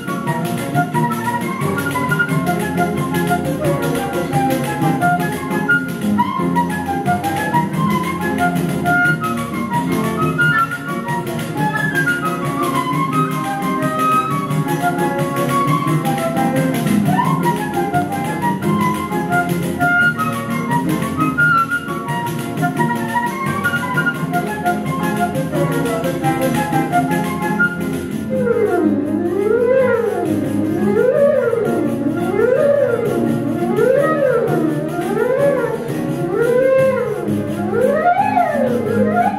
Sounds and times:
Music: 0:00.0 - 0:39.3.

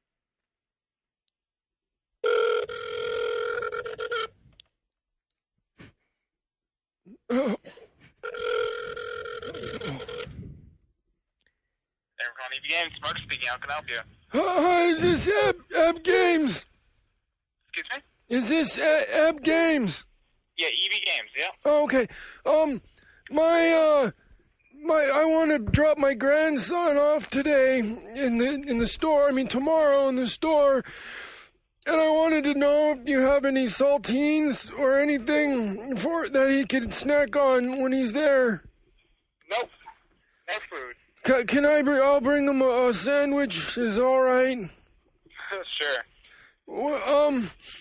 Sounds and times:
Radio: 0:12.2 - 0:14.2, 0:17.8 - 0:18.0, 0:20.6 - 0:21.6, 0:40.5 - 0:41.0, 0:45.3 - 0:46.1
Speech: 0:12.2 - 0:16.7, 0:20.6 - 0:24.1, 0:31.8 - 0:38.6, 0:40.5 - 0:44.7, 0:46.7 - 0:47.5.

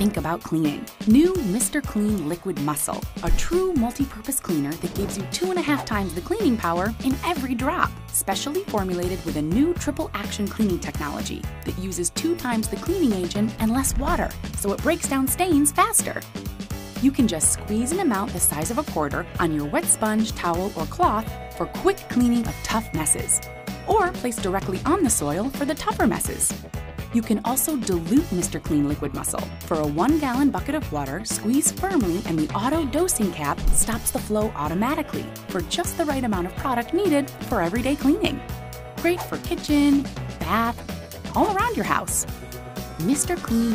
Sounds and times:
Speech: 0:00.0 - 0:16.2, 0:17.0 - 0:26.5, 0:27.1 - 0:38.4, 0:39.0 - 0:42.3, 0:43.0 - 0:43.7
Music: 0:00.0 - 0:43.7.

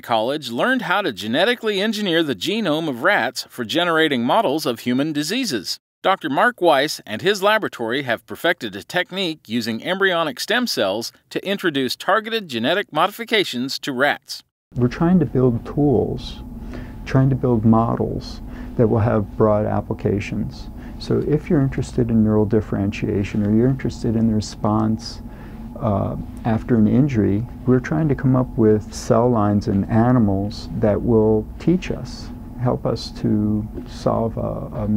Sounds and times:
Speech: 0:00.0 - 0:16.4, 0:17.1 - 0:25.2, 0:25.8 - 0:34.9.

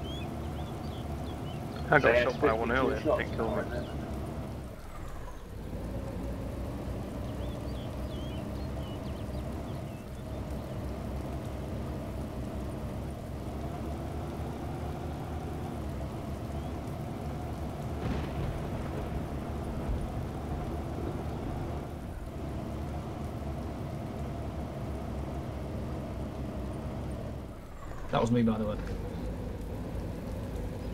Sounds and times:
Vehicle: 0:00.0 - 0:30.9.

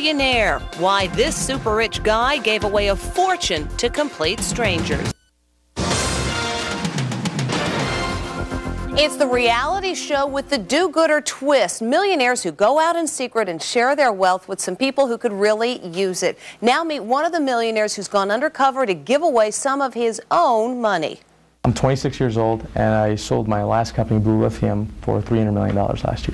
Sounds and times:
Music: 0:00.0 - 0:05.2, 0:05.8 - 0:10.8
Speech: 0:09.0 - 0:26.3.

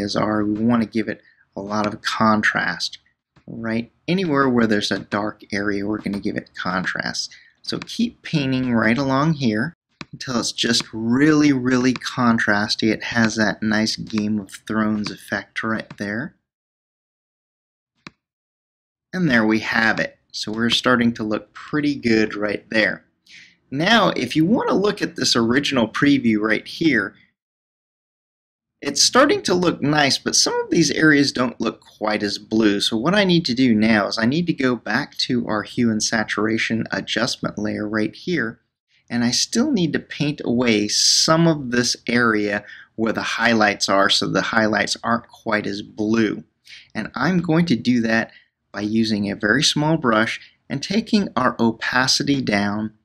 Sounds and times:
Speech: 0:00.0 - 0:16.4, 0:19.2 - 0:27.2, 0:28.8 - 0:53.0.

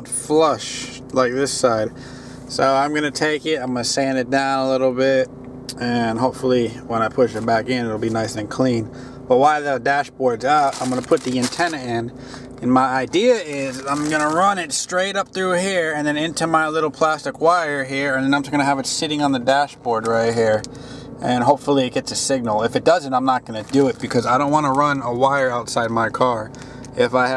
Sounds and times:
Speech: 0:00.0 - 0:27.3
Vehicle: 0:00.0 - 0:27.3.

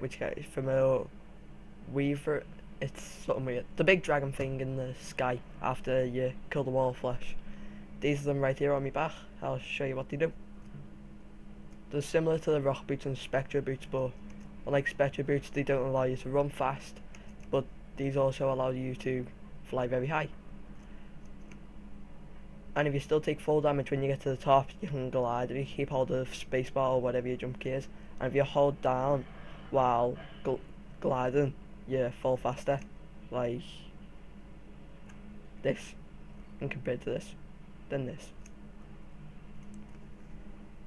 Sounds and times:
Speech: 0:00.0 - 0:01.1, 0:01.9 - 0:07.4, 0:08.0 - 0:10.4, 0:11.9 - 0:17.0, 0:17.6 - 0:20.4, 0:22.8 - 0:34.0, 0:35.6 - 0:36.0, 0:36.6 - 0:38.4.

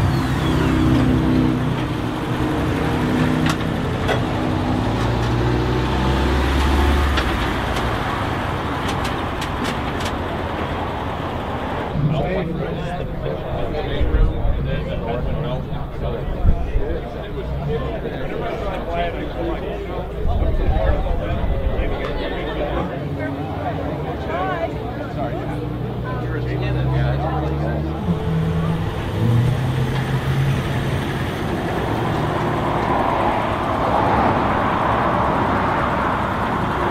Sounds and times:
Car: 0:00.0 - 0:36.9
Speech: 0:12.0 - 0:28.2.

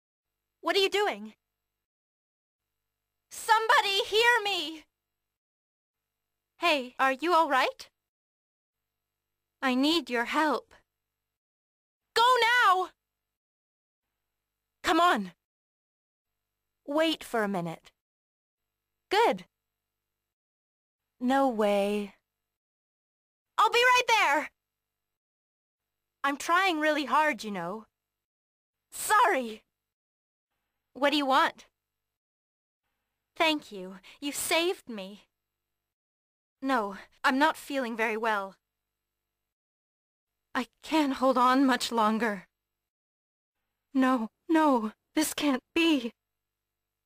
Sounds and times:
Speech: 0:00.6 - 0:01.4, 0:03.3 - 0:04.9, 0:06.6 - 0:07.9, 0:09.6 - 0:10.8, 0:12.2 - 0:13.0, 0:14.9 - 0:15.4, 0:16.9 - 0:18.0, 0:19.1 - 0:19.5, 0:21.2 - 0:22.2, 0:23.6 - 0:24.6, 0:26.3 - 0:27.9, 0:29.0 - 0:29.6, 0:31.0 - 0:31.6, 0:33.4 - 0:35.3, 0:36.6 - 0:38.6, 0:40.6 - 0:42.5, 0:44.0 - 0:46.2.

